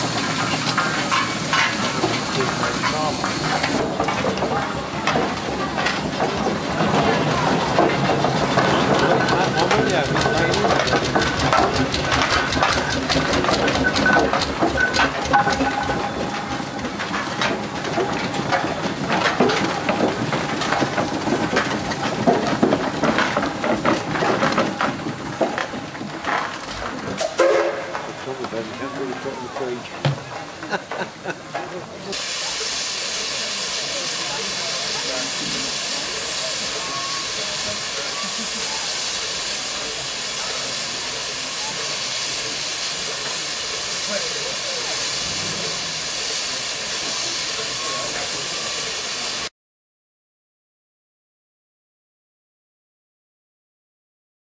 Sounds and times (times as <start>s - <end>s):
Engine: 0.0s - 30.2s, 33.4s - 49.4s
Steam: 0.0s - 49.5s
Speech: 2.3s - 5.9s, 8.6s - 11.1s, 28.1s - 30.2s, 31.5s - 49.3s
Vehicle: 44.0s - 47.2s.